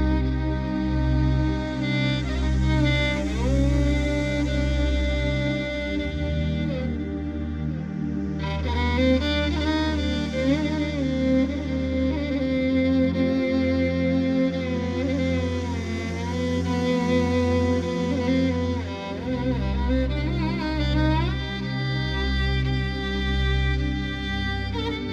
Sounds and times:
Violin, fiddle: 0.0 - 25.1.

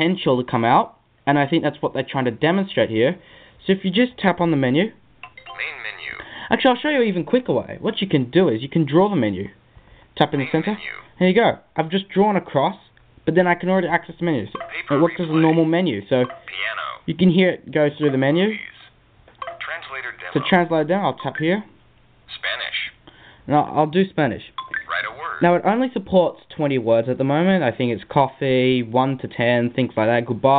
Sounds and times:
Speech: 0.0 - 5.0, 5.6 - 9.6, 10.2 - 18.9, 19.6 - 21.7, 22.3 - 30.5.

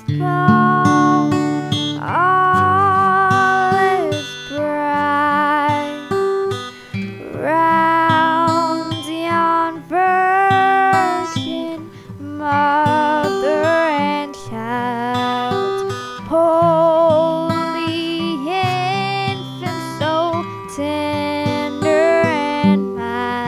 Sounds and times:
Female singing: 0.0 - 6.1, 7.2 - 23.4
Music: 0.0 - 23.4.

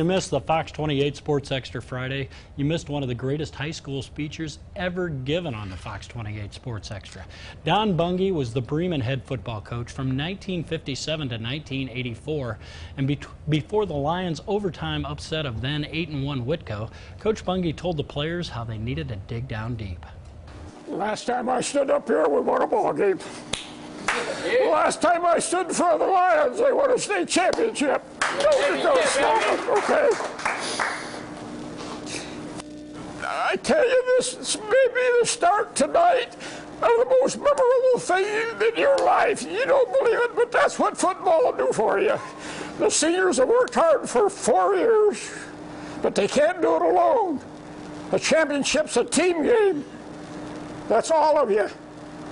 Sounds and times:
Male speech, man speaking: 0.0 - 20.2, 20.9 - 23.2, 24.4 - 30.2, 33.2 - 42.2, 42.8 - 45.4, 46.0 - 47.4, 48.1 - 49.9, 50.9 - 51.8
Narration, monologue: 0.0 - 29.8, 30.6 - 52.3.

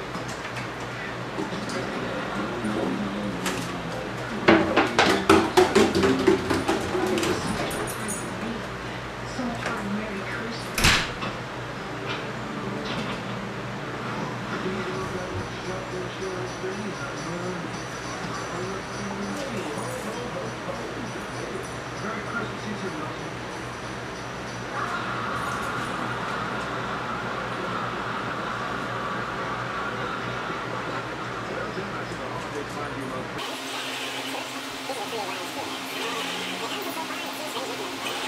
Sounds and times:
Speech: 1.4 - 5.6, 6.6 - 11.0, 14.5 - 23.5, 29.4 - 33.5, 34.3 - 38.2.

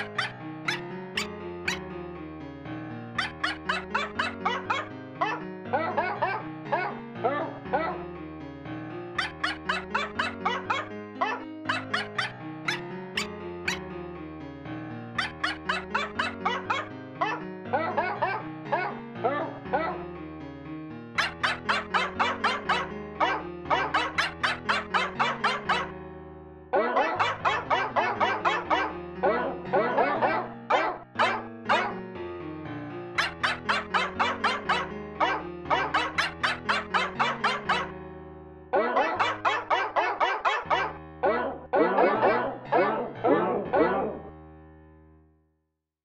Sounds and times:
Bow-wow: 0.0 - 1.8, 3.2 - 7.0, 9.2 - 13.8, 15.2 - 20.0, 21.2 - 26.0, 26.8 - 32.0, 33.2 - 38.0, 38.7 - 44.3.

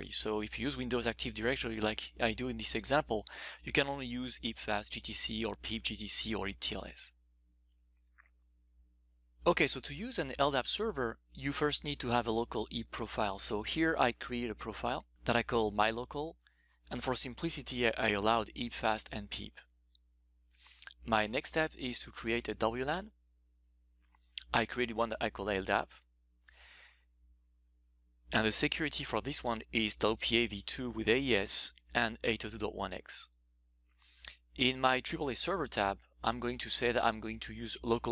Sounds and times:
Speech: 0.0 - 7.1, 9.4 - 19.6, 20.8 - 23.1, 24.4 - 26.0, 28.4 - 33.3, 34.6 - 38.1.

